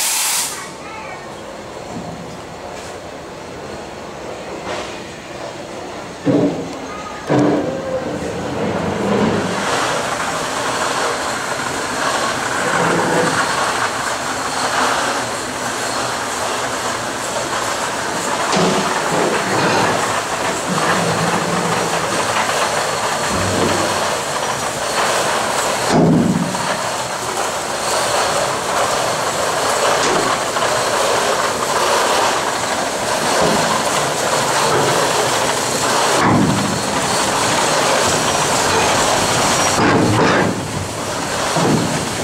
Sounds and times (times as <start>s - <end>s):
Speech: 0.7s - 1.5s, 6.8s - 8.0s
Boat, Water vehicle: 6.2s - 42.2s.